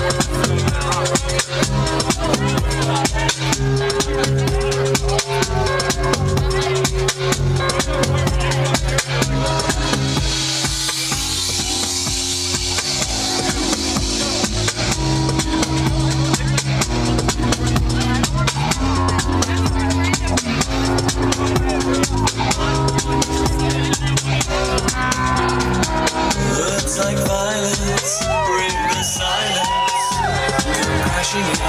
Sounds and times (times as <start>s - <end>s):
Music: 0.0s - 31.6s.